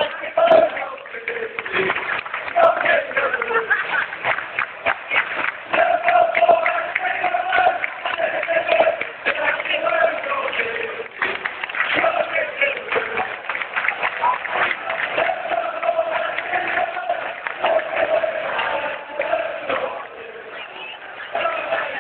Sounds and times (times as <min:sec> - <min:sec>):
Male singing: 0:00.0 - 0:03.8, 0:05.7 - 0:13.6, 0:15.1 - 0:22.0.